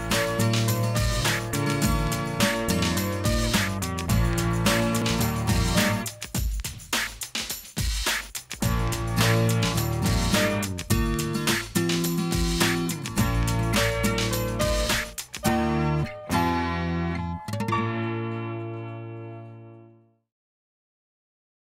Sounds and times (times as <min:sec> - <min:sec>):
Music: 0:00.0 - 0:20.3.